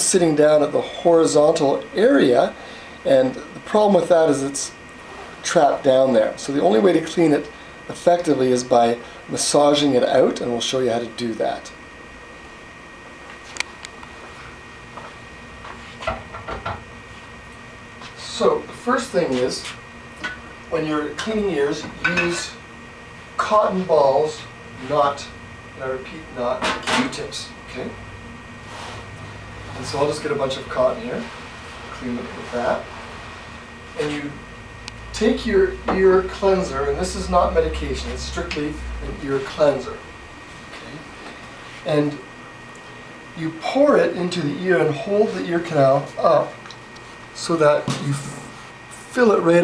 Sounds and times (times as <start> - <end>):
Speech: 0.0 - 4.8, 5.4 - 11.8, 18.2 - 19.8, 20.7 - 22.6, 23.4 - 28.0, 29.8 - 32.9, 34.0 - 34.4, 35.1 - 40.0, 41.8 - 42.2, 43.4 - 46.6, 47.4 - 49.6.